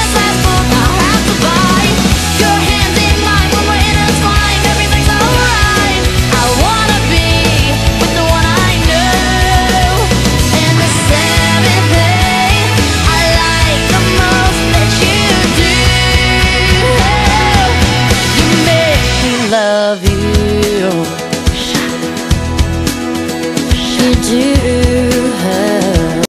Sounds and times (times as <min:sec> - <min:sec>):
Music: 0:00.0 - 0:26.2.